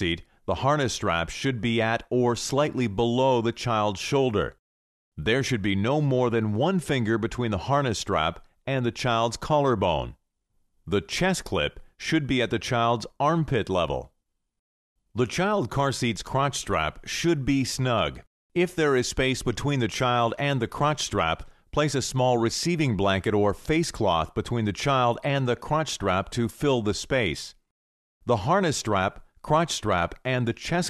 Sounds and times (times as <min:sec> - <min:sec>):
Speech: 0:00.0 - 0:04.6, 0:05.2 - 0:10.2, 0:10.9 - 0:14.2, 0:15.2 - 0:27.6, 0:28.3 - 0:30.8.